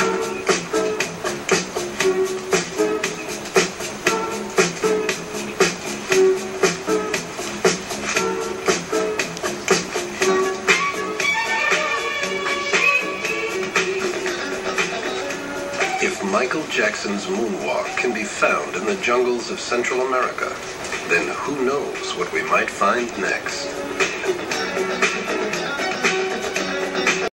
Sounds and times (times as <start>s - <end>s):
Music: 0.0s - 27.3s
Speech: 16.0s - 23.8s.